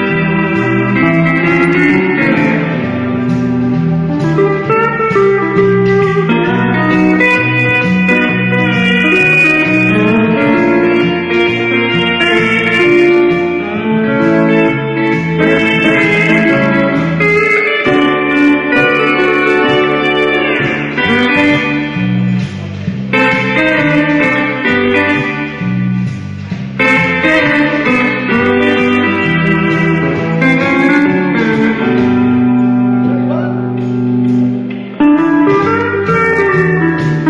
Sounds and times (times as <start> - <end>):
Guitar: 0.0 - 37.2.